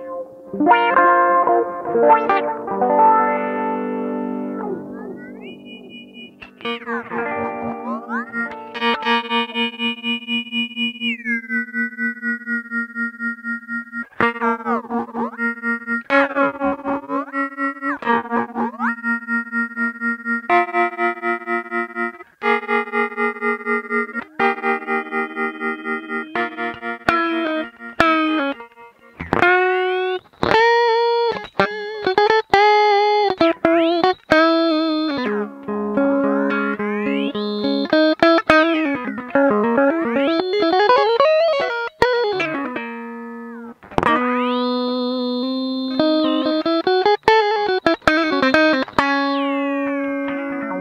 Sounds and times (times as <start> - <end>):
Synthesizer: 0.0 - 12.0
Effects unit: 0.0 - 50.8
Guitar: 0.0 - 50.8.